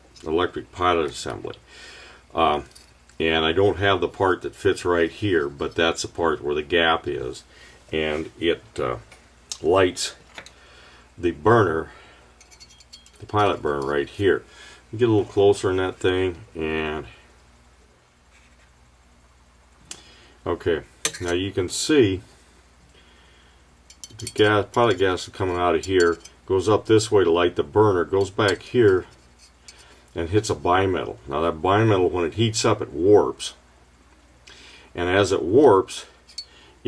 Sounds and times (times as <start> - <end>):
Speech: 0.2 - 1.6, 2.3 - 10.2, 11.2 - 12.0, 13.2 - 17.2, 20.4 - 22.3, 24.2 - 29.2, 30.2 - 33.6, 35.0 - 36.2.